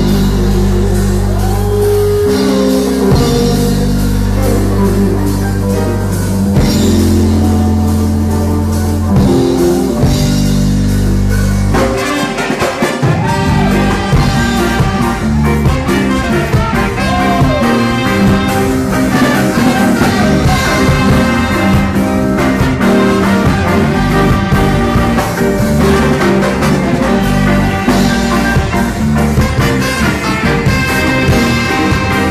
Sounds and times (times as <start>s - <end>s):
Brass instrument: 0.0s - 32.3s
Saxophone: 0.0s - 32.3s.